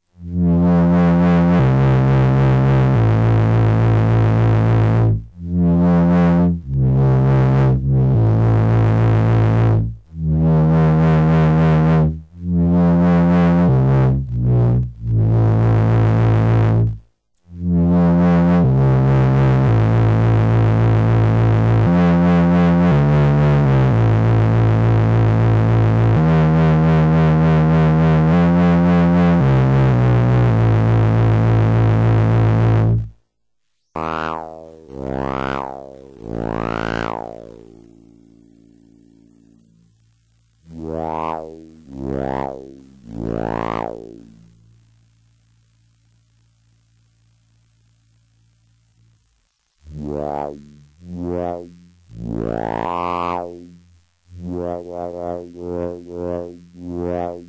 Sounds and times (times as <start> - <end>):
Sampler: 0.0 - 33.2, 34.0 - 44.9, 48.8 - 57.4.